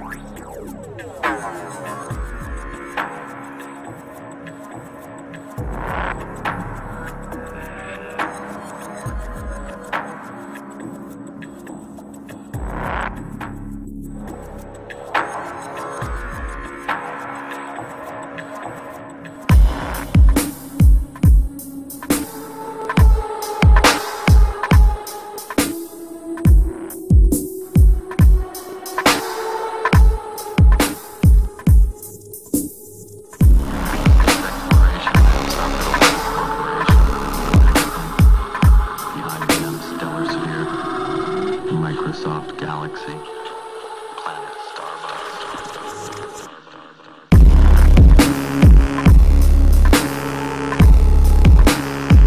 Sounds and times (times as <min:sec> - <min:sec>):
Dubstep: 0:00.0 - 0:04.0, 0:19.5 - 0:43.1, 0:44.2 - 0:52.2.